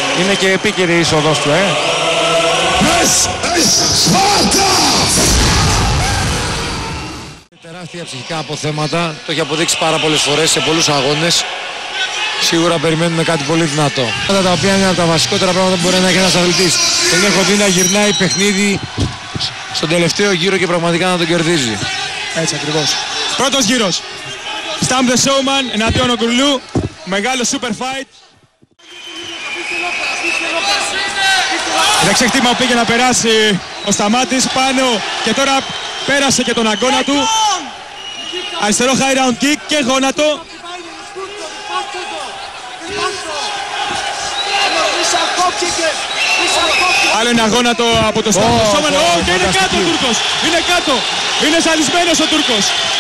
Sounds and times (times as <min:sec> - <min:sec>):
Speech: 0:12.4 - 0:18.8, 0:29.4 - 0:37.6.